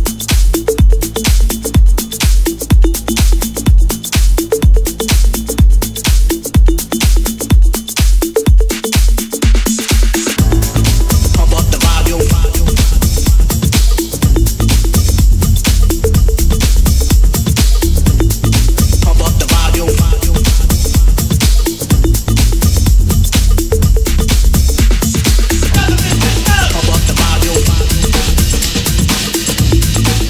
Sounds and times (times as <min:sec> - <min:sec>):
Music: 0:00.0 - 0:30.2.